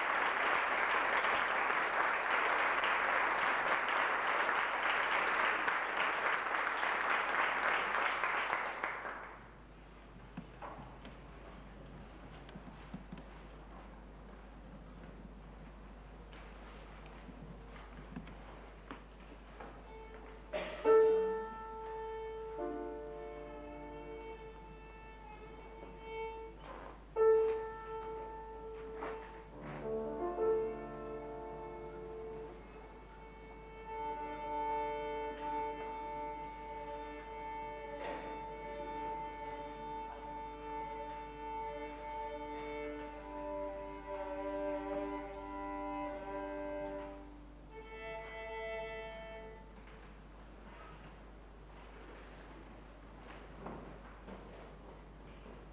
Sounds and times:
Violin, fiddle: 18.0 - 49.8.

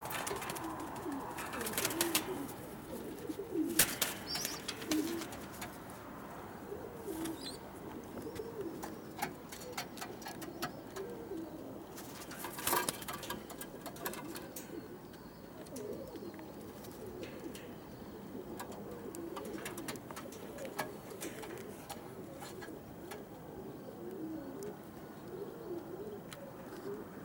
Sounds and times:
Pigeon, dove: 0.0 - 27.2.

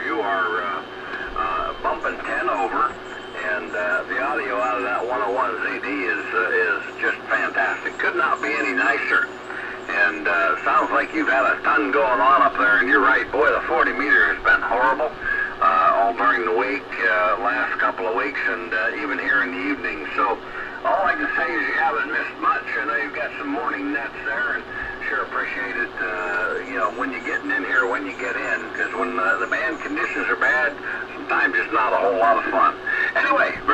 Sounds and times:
Speech: 0.0 - 33.7.

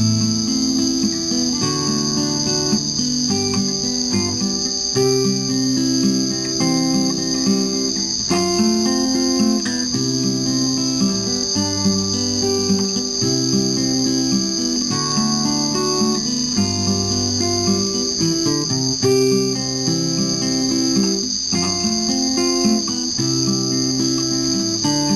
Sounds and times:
Acoustic guitar: 0.0 - 25.1.

